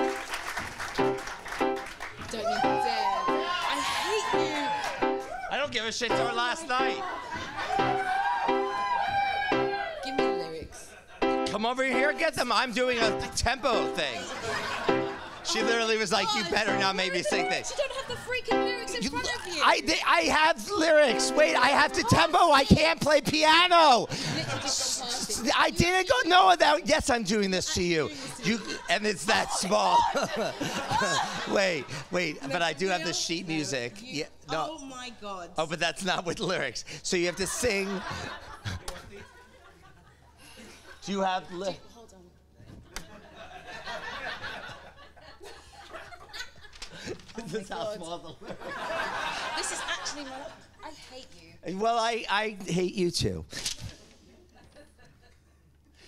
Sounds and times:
Music: 0:00.0 - 0:05.4, 0:06.0 - 0:12.4, 0:13.0 - 0:14.0, 0:14.8 - 0:15.8, 0:16.5 - 0:17.7, 0:18.3 - 0:19.1, 0:21.0 - 0:22.1.

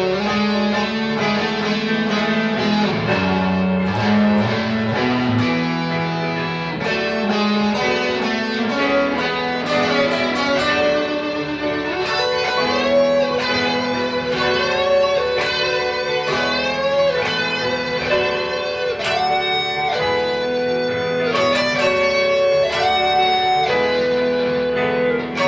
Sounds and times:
Electric guitar: 0:00.0 - 0:25.4
Strum: 0:00.0 - 0:25.4.

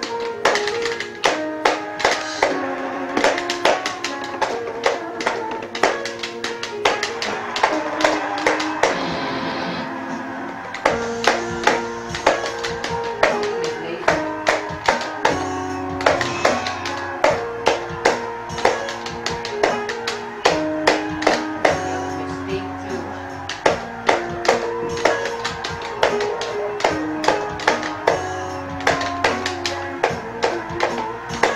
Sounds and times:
Speech: 0:13.7 - 0:14.1, 0:22.4 - 0:23.0.

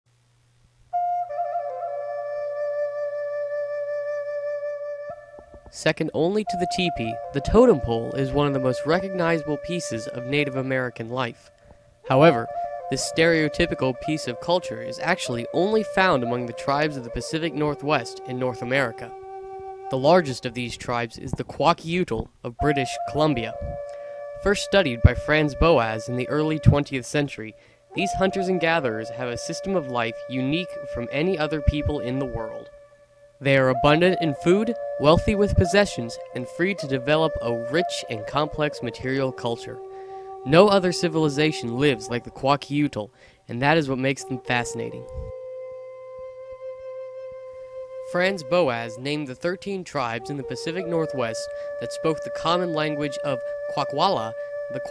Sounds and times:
Flute: 0:00.9 - 0:54.9
Speech: 0:05.7 - 0:11.5, 0:12.1 - 0:19.1, 0:19.9 - 0:23.8, 0:24.4 - 0:32.7, 0:33.4 - 0:39.8, 0:40.5 - 0:45.3, 0:48.1 - 0:54.9.

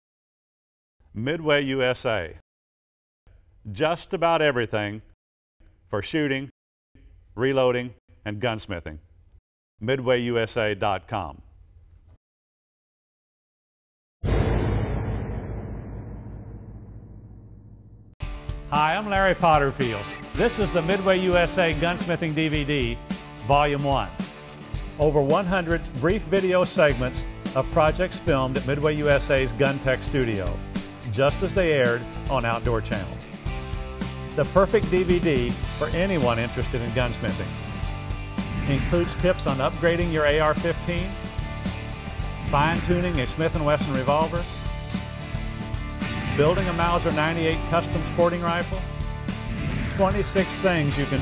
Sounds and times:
Speech: 0:01.1 - 0:02.4, 0:03.7 - 0:05.1, 0:05.9 - 0:06.5, 0:07.4 - 0:09.0, 0:09.8 - 0:11.4, 0:18.7 - 0:24.2, 0:25.0 - 0:33.2, 0:34.4 - 0:37.5, 0:38.7 - 0:41.1, 0:42.5 - 0:44.5, 0:46.3 - 0:48.9, 0:50.0 - 0:51.2.

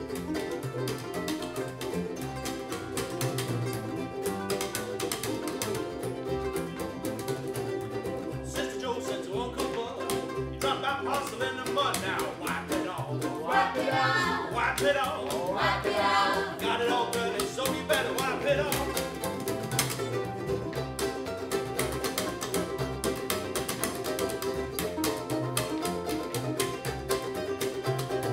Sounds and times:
Ukulele: 0:00.0 - 0:28.3
Singing: 0:10.6 - 0:18.9.

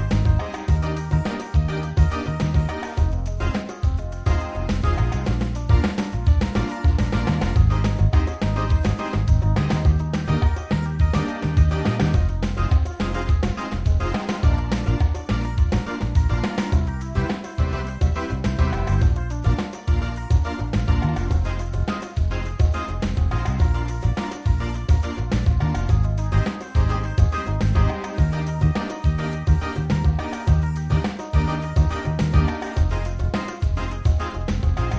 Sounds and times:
Music: 0:00.0 - 0:34.9.

